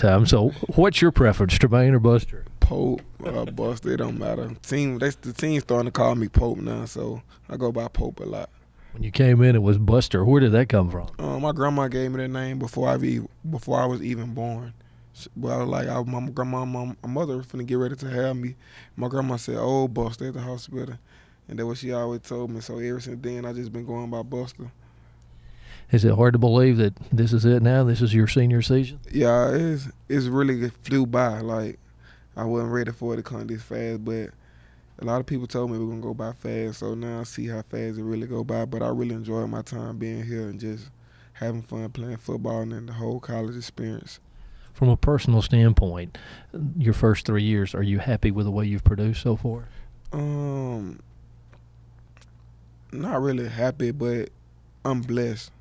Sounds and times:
Speech: 0.0s - 24.8s, 25.9s - 31.8s, 32.4s - 34.4s, 35.0s - 44.2s, 44.8s - 51.0s, 52.9s - 55.6s.

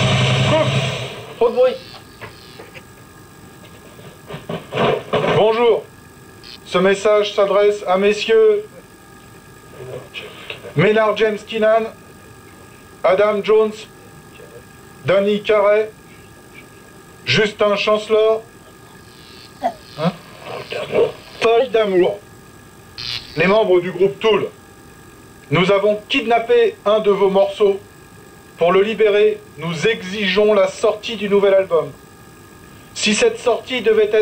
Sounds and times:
Speech: 1.4s - 1.8s, 6.7s - 8.8s, 9.8s - 12.0s, 13.0s - 16.0s, 17.3s - 19.0s, 21.4s - 22.2s, 23.4s - 24.6s, 25.5s - 27.8s, 28.6s - 32.0s, 33.0s - 34.2s.

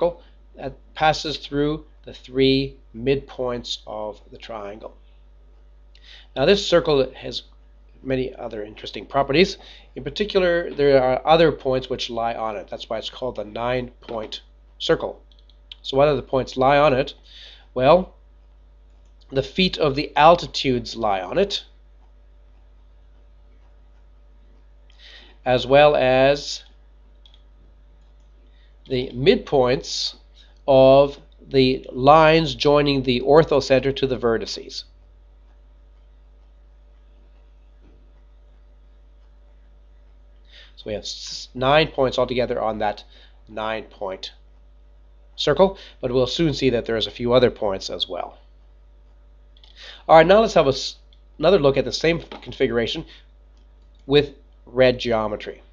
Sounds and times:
Speech: 0.0s - 5.0s, 6.1s - 15.2s, 15.8s - 18.2s, 19.3s - 21.7s, 25.4s - 26.7s, 28.9s - 34.9s, 40.7s - 44.4s, 45.4s - 48.4s, 49.8s - 53.2s, 54.1s - 55.7s.

